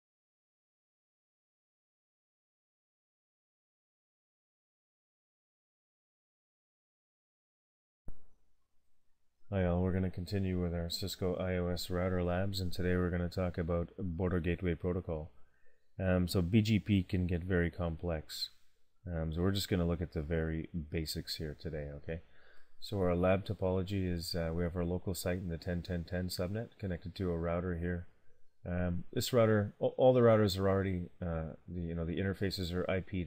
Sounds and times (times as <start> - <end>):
Speech: 9.5 - 15.4, 16.0 - 28.1, 28.7 - 33.2.